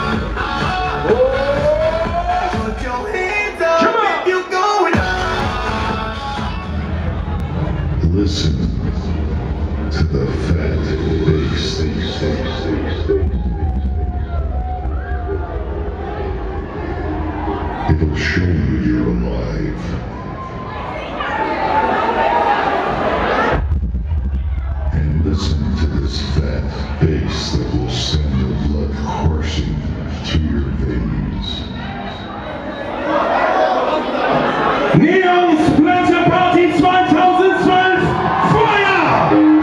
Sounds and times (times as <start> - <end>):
Speech: 8.0 - 8.8, 9.9 - 13.0, 17.9 - 20.0, 24.9 - 31.7, 35.0 - 39.4.